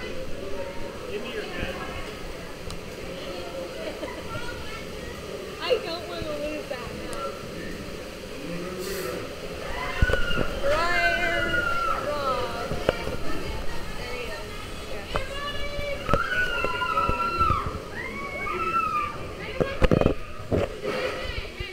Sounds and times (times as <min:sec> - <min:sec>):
Water: 0:00.0 - 0:21.7.